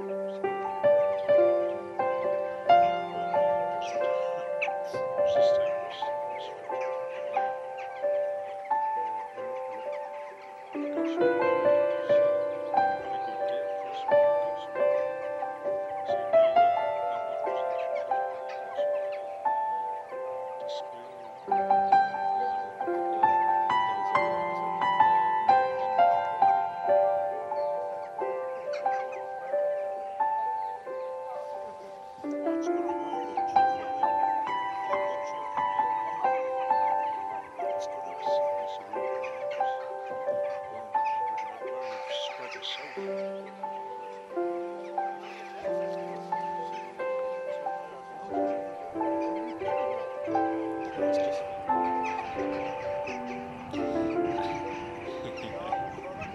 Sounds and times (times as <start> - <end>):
Bird: 0.0 - 56.3
Music: 0.0 - 56.3.